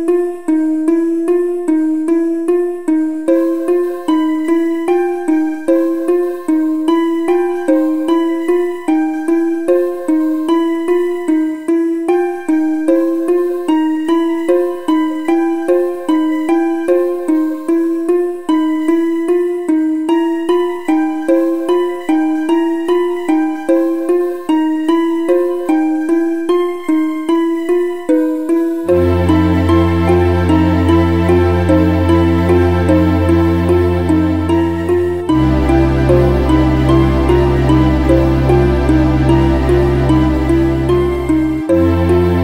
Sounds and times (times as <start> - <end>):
Music: 0.0 - 42.4.